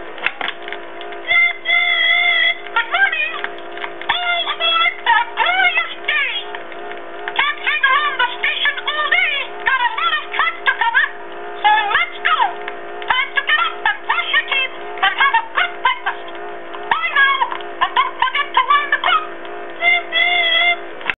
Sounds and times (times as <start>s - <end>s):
Speech: 1.2s - 3.5s, 4.1s - 6.6s, 7.4s - 20.8s.